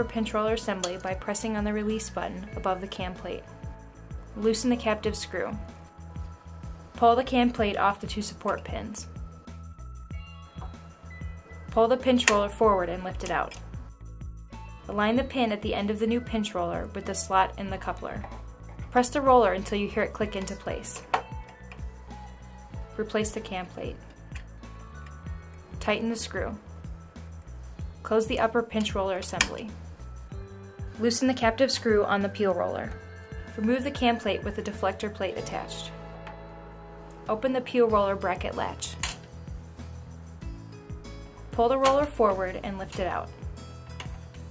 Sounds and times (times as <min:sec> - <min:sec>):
Speech: 0:00.0 - 0:03.4, 0:04.4 - 0:05.6, 0:07.0 - 0:09.1, 0:11.7 - 0:13.6, 0:14.9 - 0:18.3, 0:19.0 - 0:21.0, 0:23.0 - 0:24.0, 0:25.8 - 0:26.6, 0:28.1 - 0:29.7, 0:31.0 - 0:32.9, 0:33.6 - 0:35.9, 0:37.3 - 0:39.0, 0:41.6 - 0:43.3
Music: 0:00.0 - 0:44.5.